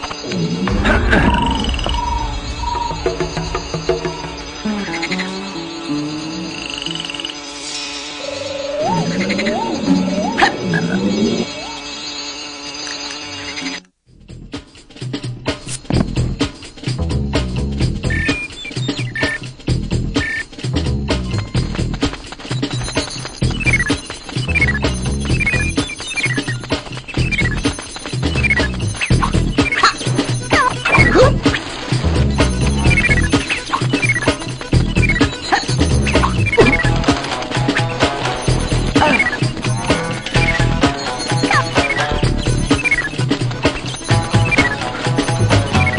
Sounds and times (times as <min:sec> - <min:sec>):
Music: 0:00.0 - 0:45.9.